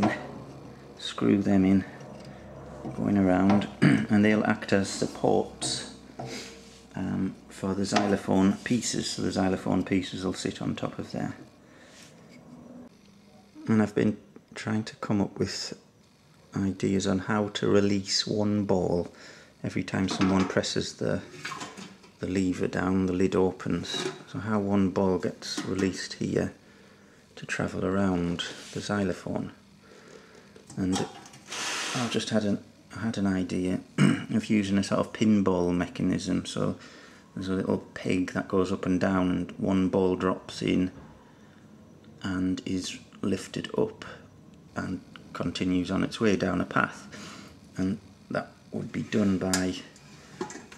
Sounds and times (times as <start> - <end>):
Speech: 0.0 - 0.4, 1.0 - 2.0, 3.0 - 6.0, 6.9 - 11.5, 13.6 - 15.9, 16.5 - 21.3, 22.2 - 26.6, 27.4 - 29.6, 30.7 - 31.2, 32.0 - 36.8, 37.4 - 41.0, 42.2 - 44.2, 44.8 - 47.1, 47.8 - 50.0.